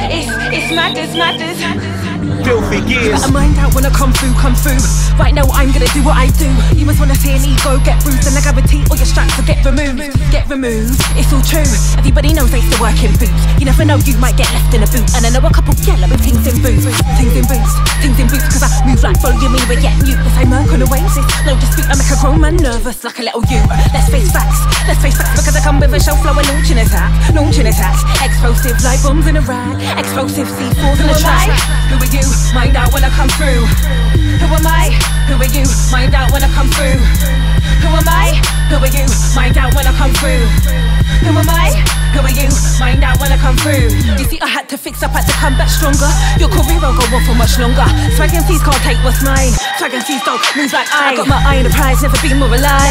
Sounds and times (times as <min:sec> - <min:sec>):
Music: 0:00.0 - 0:52.9.